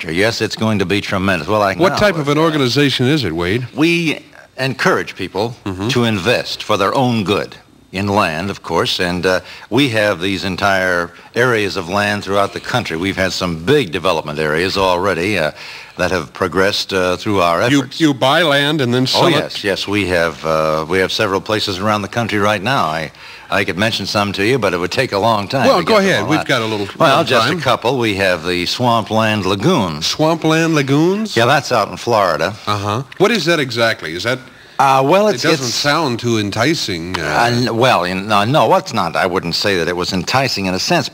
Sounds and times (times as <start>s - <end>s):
Speech: 0.0s - 41.1s.